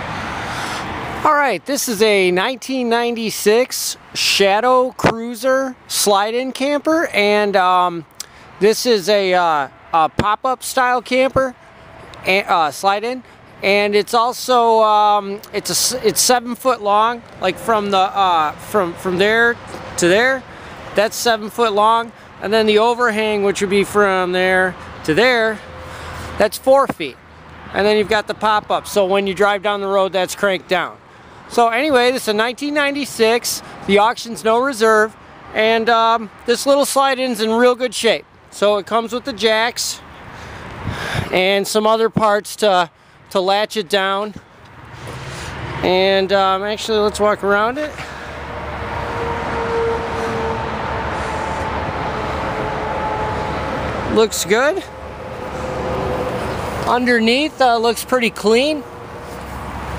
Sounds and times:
Speech: 0:01.2 - 0:11.6, 0:12.2 - 0:25.7, 0:26.4 - 0:40.1, 0:41.3 - 0:44.4, 0:45.8 - 0:48.1, 0:54.1 - 0:55.0, 0:56.8 - 0:58.9.

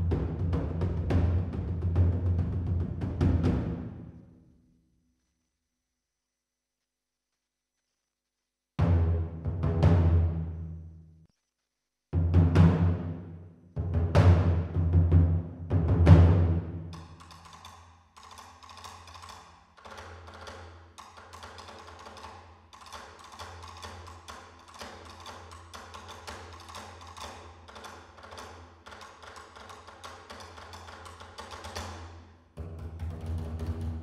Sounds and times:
Percussion: 0:00.0 - 0:04.4, 0:12.2 - 0:34.0.

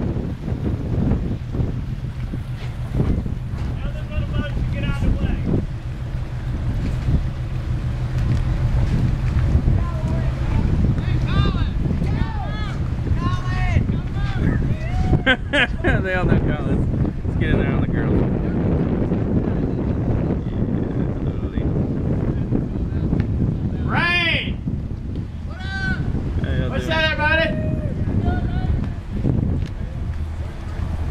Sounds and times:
Boat, Water vehicle: 0:00.0 - 0:31.1.

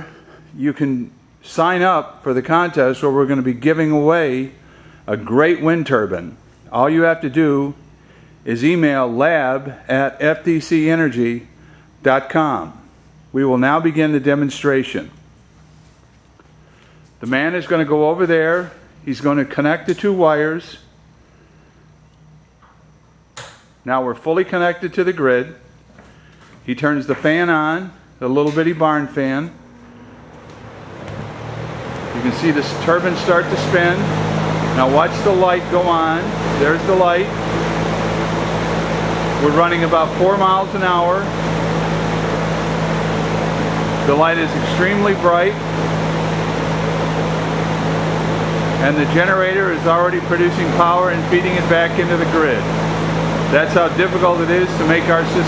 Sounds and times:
Speech: 0:00.5 - 0:07.8, 0:08.4 - 0:15.2, 0:17.2 - 0:20.9, 0:23.8 - 0:25.6, 0:26.6 - 0:29.6, 0:32.2 - 0:34.1, 0:34.8 - 0:37.4, 0:39.4 - 0:41.4, 0:44.0 - 0:45.6, 0:48.8 - 0:52.7, 0:53.5 - 0:55.4.

